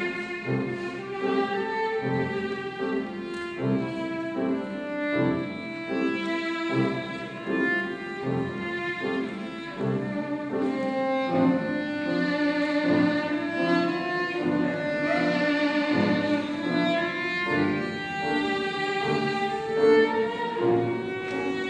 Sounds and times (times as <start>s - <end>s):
Violin, fiddle: 0.0s - 21.6s.